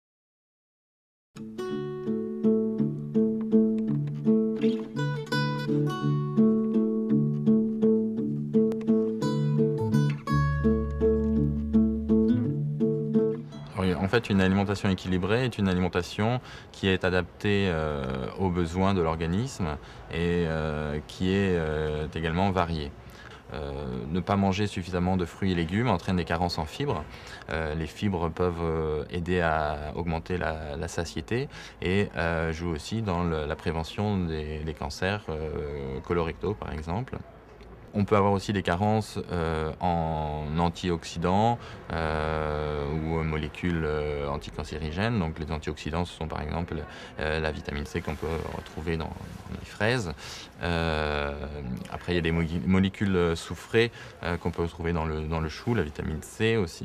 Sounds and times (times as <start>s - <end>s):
Speech: 13.7s - 56.8s.